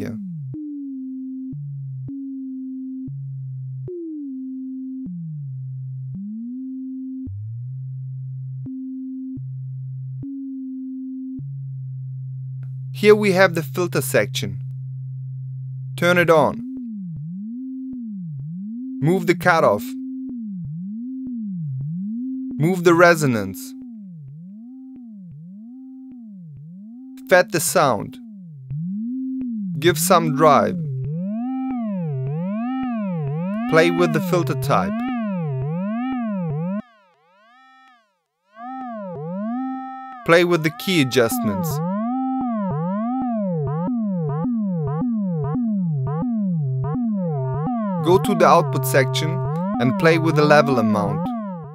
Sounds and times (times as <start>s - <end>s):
Speech: 0.0s - 0.2s, 13.0s - 14.6s, 16.0s - 16.6s, 19.0s - 19.9s, 22.6s - 23.7s, 27.2s - 28.2s, 29.8s - 30.8s, 33.7s - 35.0s, 40.3s - 41.8s, 48.0s - 51.3s.